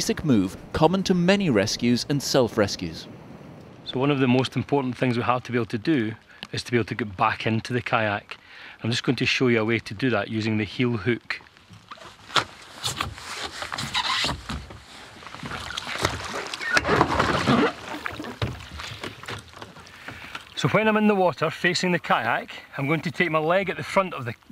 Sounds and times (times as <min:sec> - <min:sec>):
Speech: 0:00.0 - 0:03.1, 0:03.9 - 0:11.4, 0:20.6 - 0:24.5.